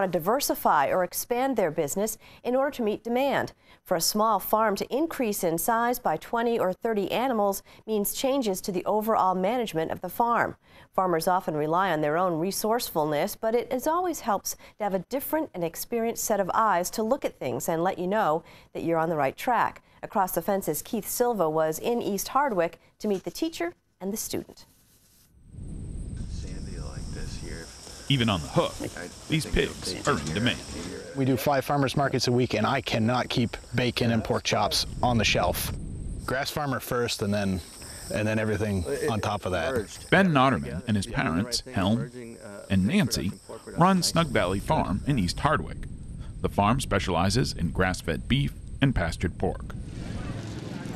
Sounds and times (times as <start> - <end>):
Cricket: 25.5 - 50.6.